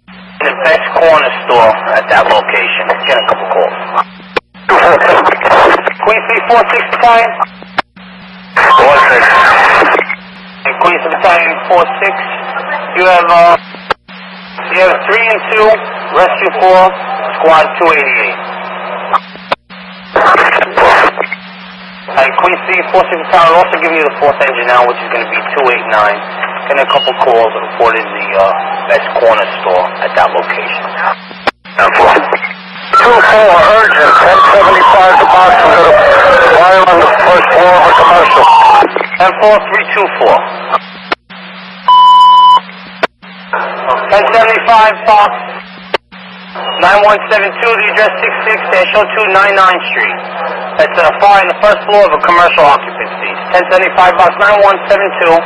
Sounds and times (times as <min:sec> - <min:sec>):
Speech: 0:00.4 - 0:03.8, 0:04.7 - 0:07.5, 0:08.6 - 0:09.5, 0:10.6 - 0:13.7, 0:14.6 - 0:18.4, 0:22.1 - 0:31.2, 0:31.8 - 0:32.4, 0:33.0 - 0:40.5, 0:43.8 - 0:45.6, 0:46.6 - 0:55.4.